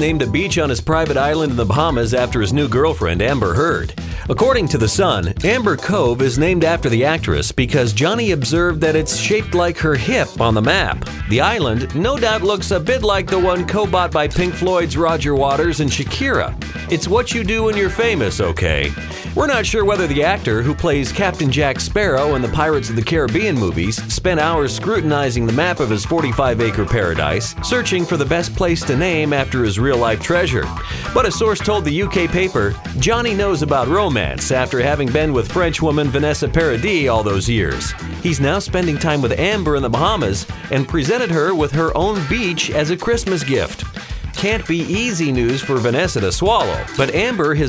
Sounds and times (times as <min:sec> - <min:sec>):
Music: 0:00.0 - 0:47.6
Speech: 0:00.0 - 0:47.6.